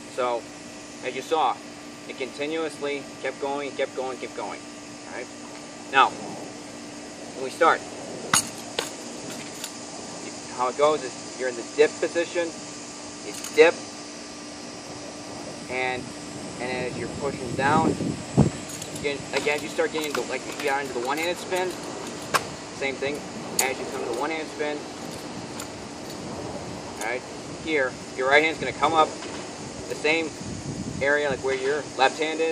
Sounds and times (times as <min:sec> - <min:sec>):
Outside, rural or natural: 0:00.0 - 0:32.5
Speech: 0:00.1 - 0:00.4, 0:01.0 - 0:05.3, 0:05.9 - 0:06.2, 0:07.4 - 0:07.8, 0:10.2 - 0:12.6, 0:13.2 - 0:13.8, 0:15.7 - 0:18.0, 0:19.0 - 0:21.8, 0:22.8 - 0:24.9, 0:27.0 - 0:29.2, 0:29.9 - 0:30.4, 0:31.0 - 0:32.5.